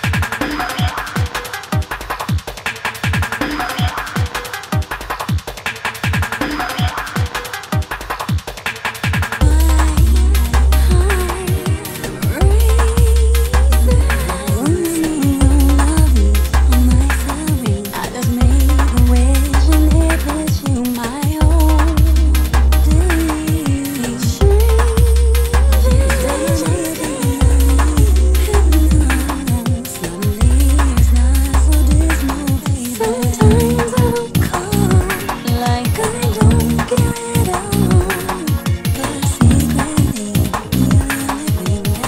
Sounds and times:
Drum and bass: 0.0s - 42.0s.

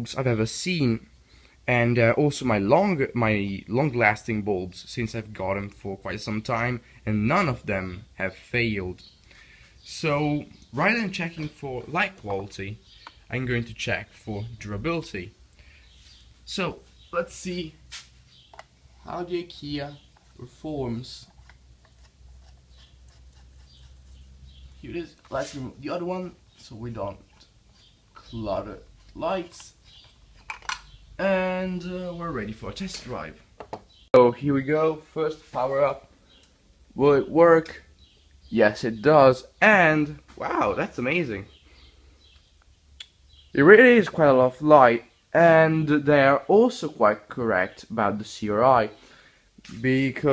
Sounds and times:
Speech: 0.0s - 1.1s, 1.7s - 9.0s, 9.9s - 15.4s, 16.5s - 17.8s, 19.0s - 21.3s, 24.8s - 27.3s, 28.2s - 29.8s, 31.2s - 33.4s, 34.2s - 36.1s, 37.0s - 37.9s, 38.5s - 41.5s, 43.5s - 49.0s, 49.6s - 50.3s.

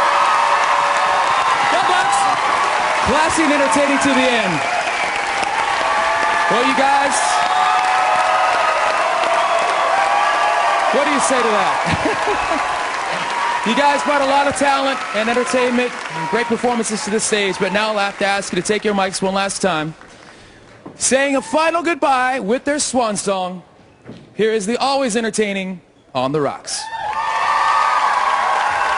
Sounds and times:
Narration, monologue: 3.0s - 4.7s, 13.6s - 26.9s
Male speech, man speaking: 3.1s - 4.6s, 6.5s - 7.4s, 11.0s - 11.8s, 13.7s - 20.0s, 21.0s - 23.6s, 24.4s - 26.9s.

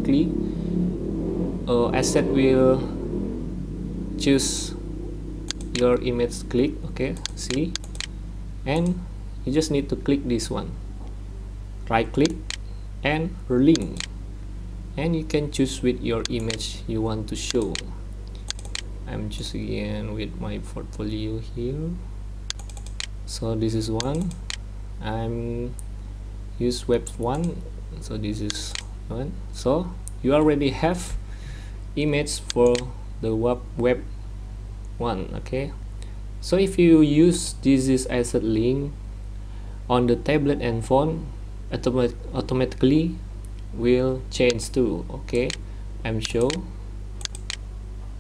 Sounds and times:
Speech: 0.0s - 0.4s, 1.7s - 2.9s, 4.2s - 4.8s, 5.8s - 7.8s, 8.7s - 10.8s, 11.9s - 12.4s, 13.0s - 14.1s, 15.0s - 18.0s, 19.1s - 22.0s, 23.3s - 24.4s, 25.0s - 25.8s, 26.6s - 31.2s, 32.0s - 34.1s, 35.0s - 35.8s, 36.4s - 39.0s, 39.9s - 46.7s.

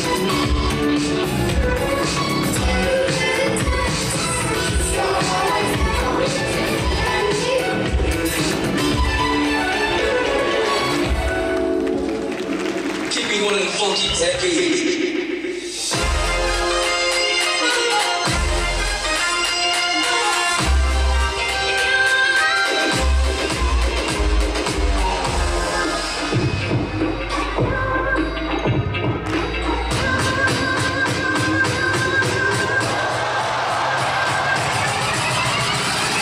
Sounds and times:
Music: 0.0s - 36.2s
Speech: 13.1s - 15.1s.

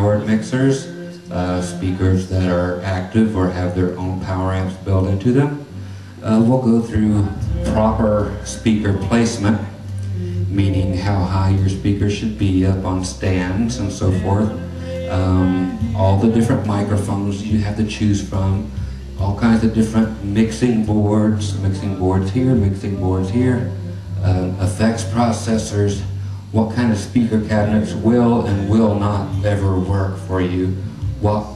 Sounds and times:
Speech: 0.0s - 31.5s.

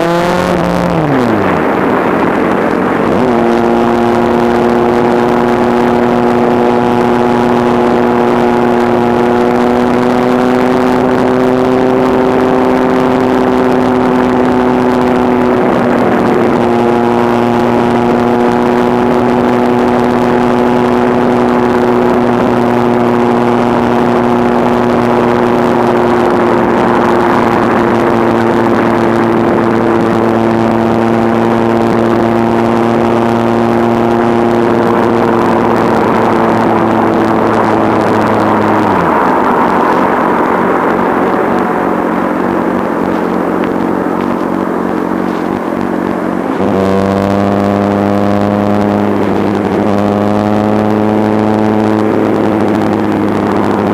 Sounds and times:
Accelerating, revving, vroom: 0.0s - 1.8s, 3.0s - 53.9s
Vehicle: 0.0s - 53.9s.

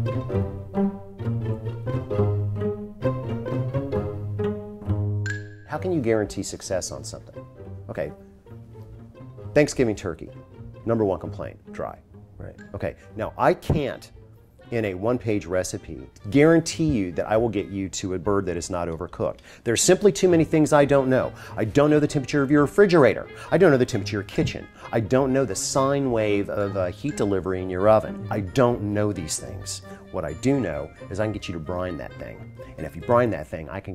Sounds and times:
Music: 0.0s - 33.9s
Speech: 5.7s - 7.3s, 7.9s - 8.2s, 9.6s - 10.3s, 10.9s - 14.1s, 14.7s - 33.9s.

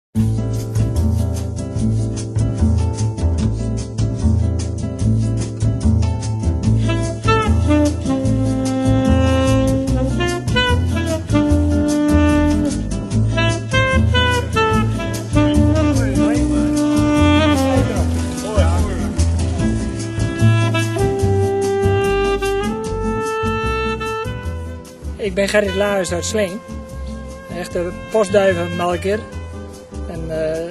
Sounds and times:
Music: 0.2s - 30.7s
Speech: 16.0s - 16.5s, 17.7s - 19.1s, 25.2s - 26.6s, 27.5s - 29.3s, 30.1s - 30.7s.

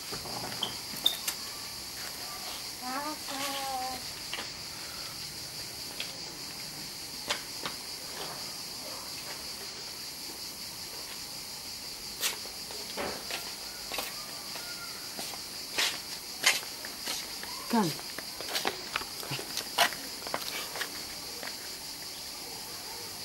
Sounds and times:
Cricket: 0.0s - 23.2s.

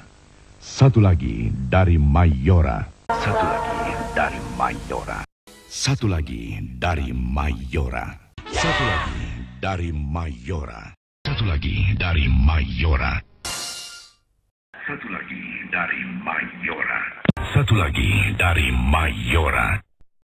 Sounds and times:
Speech: 0.6s - 13.3s, 14.8s - 19.9s
Television: 14.8s - 19.6s.

